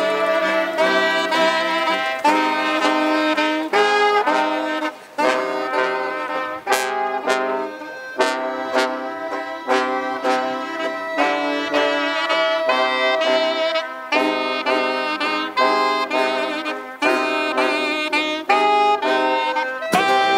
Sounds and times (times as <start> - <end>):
Music: 0.0 - 20.3.